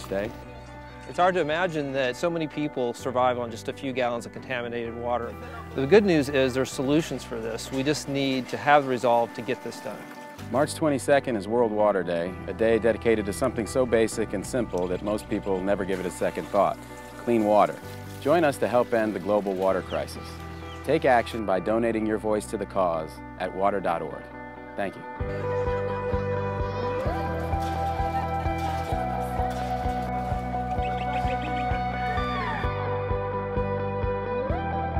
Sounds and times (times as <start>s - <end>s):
Music: 0.0s - 34.9s
Speech: 1.1s - 20.3s, 20.9s - 25.0s.